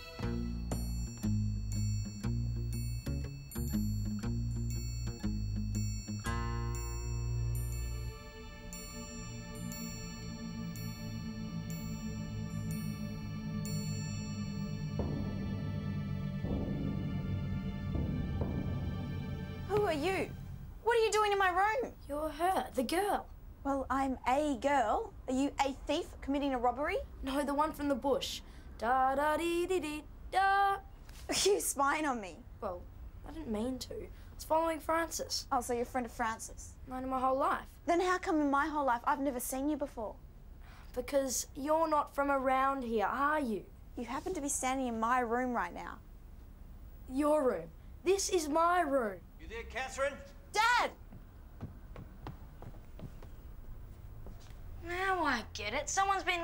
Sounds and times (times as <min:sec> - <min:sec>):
Female speech, woman speaking: 0:19.7 - 0:40.2, 0:40.9 - 0:46.0, 0:47.1 - 0:49.2, 0:50.5 - 0:51.0, 0:54.8 - 0:56.4.